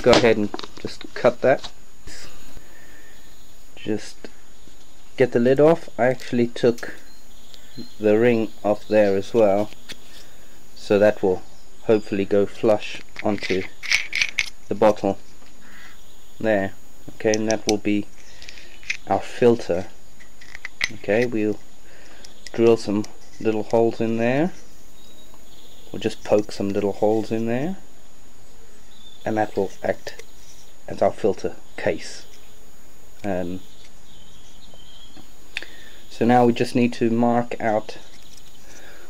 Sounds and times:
Speech: 0:00.0 - 0:02.3, 0:03.8 - 0:04.2, 0:05.2 - 0:07.0, 0:08.0 - 0:09.7, 0:10.8 - 0:13.7, 0:14.7 - 0:15.2, 0:16.4 - 0:18.1, 0:19.1 - 0:19.9, 0:20.9 - 0:21.6, 0:22.5 - 0:24.6, 0:25.9 - 0:27.8, 0:29.3 - 0:30.2, 0:30.9 - 0:32.3, 0:33.2 - 0:33.6, 0:36.1 - 0:38.0.

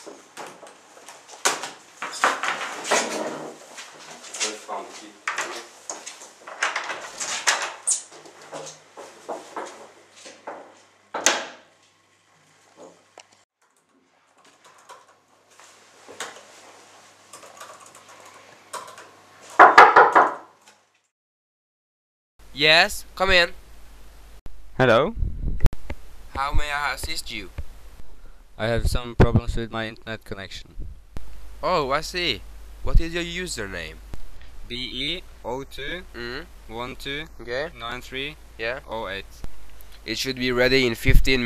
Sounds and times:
Inside, small room: 0:00.0 - 0:21.1.

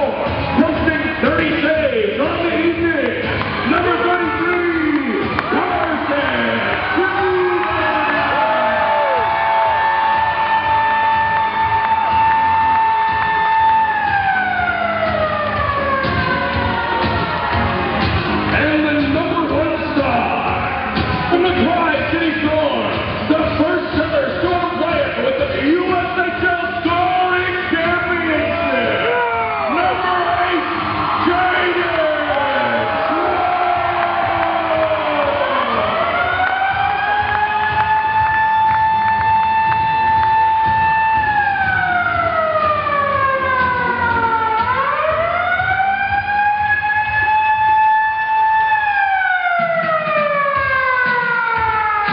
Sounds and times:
Music: 0:00.0 - 0:52.1
Siren: 0:07.2 - 0:18.2, 0:32.2 - 0:52.1.

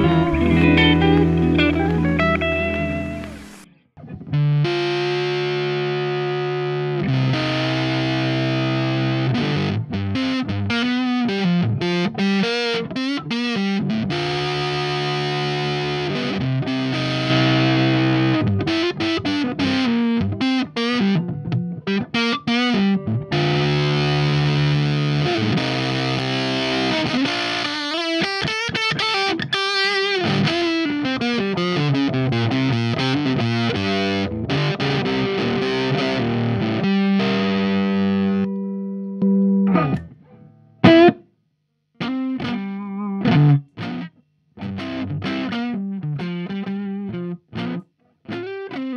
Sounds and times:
Music: 0:00.0 - 0:41.3, 0:42.0 - 0:48.9
Distortion: 0:00.0 - 0:48.9.

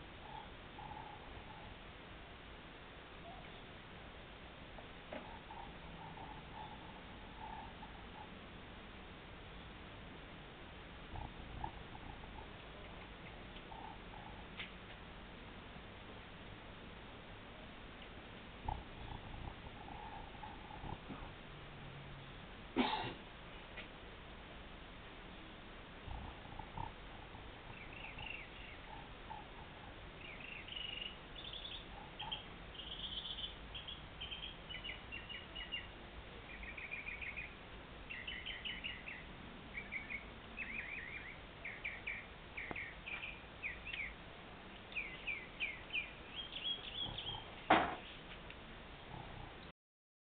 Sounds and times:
Bird: 0:26.1 - 0:48.2.

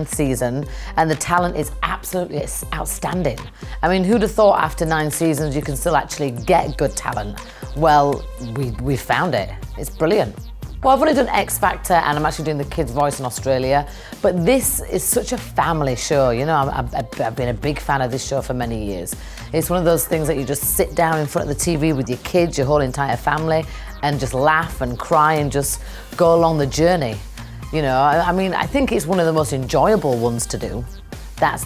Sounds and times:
Music: 0:00.0 - 0:31.6
Speech: 0:00.0 - 0:31.6.

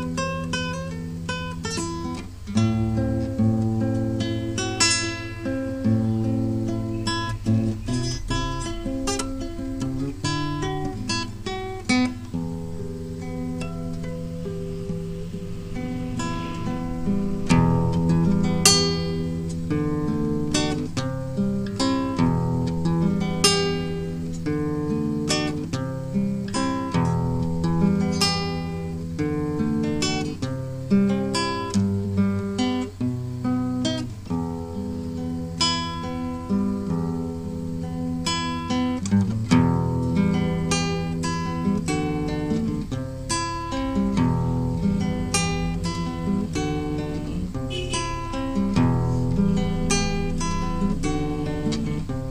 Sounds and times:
Acoustic guitar: 0:00.0 - 0:52.3
Strum: 0:00.0 - 0:52.3.

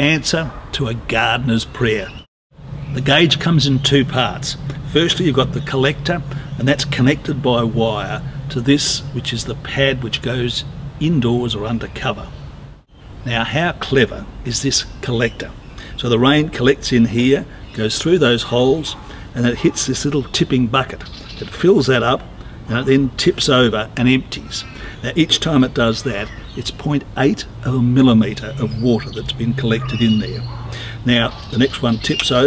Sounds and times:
Speech: 0:00.0 - 0:02.3, 0:02.9 - 0:12.3, 0:13.2 - 0:32.4.

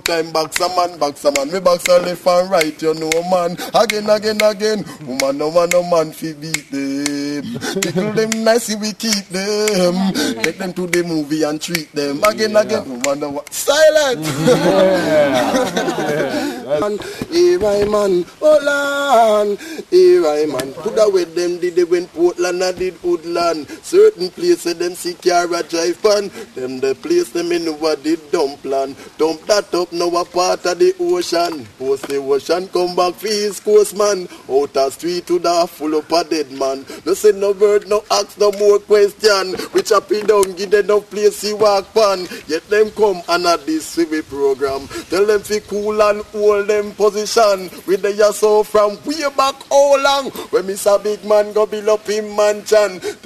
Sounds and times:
Speech: 0:07.8 - 0:08.3, 0:09.7 - 0:10.8, 0:12.2 - 0:21.7.

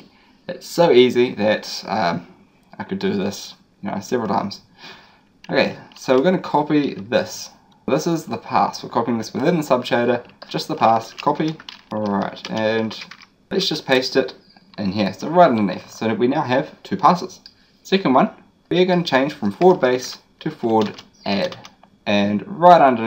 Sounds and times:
Speech: 0:00.0 - 0:04.7, 0:05.5 - 0:23.0
Inside, small room: 0:00.0 - 0:23.0
Computer keyboard: 0:05.4 - 0:07.2, 0:10.2 - 0:13.3, 0:19.5 - 0:21.8.

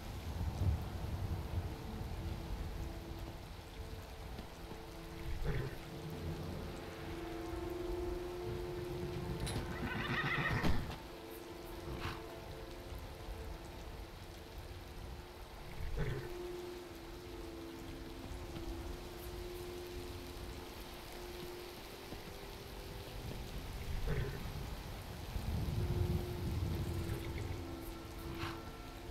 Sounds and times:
Music: 0:00.0 - 0:29.1
Neigh, whinny: 0:09.4 - 0:11.0, 0:15.7 - 0:16.3.

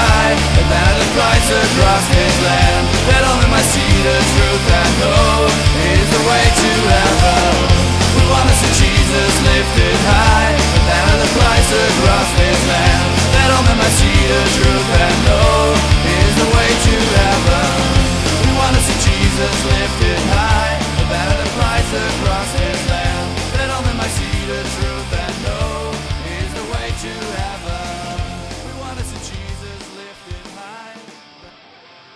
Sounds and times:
Punk rock: 0:00.0 - 0:32.1.

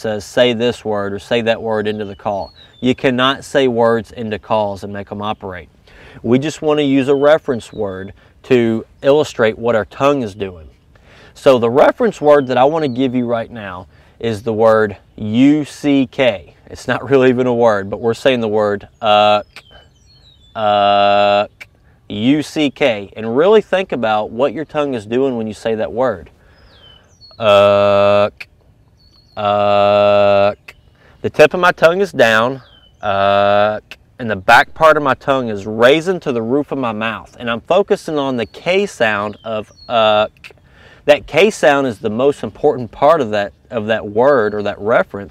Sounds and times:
Speech: 0:00.0 - 0:10.7, 0:11.4 - 0:19.8, 0:20.6 - 0:26.3, 0:27.4 - 0:28.5, 0:29.4 - 0:40.5, 0:41.1 - 0:45.3.

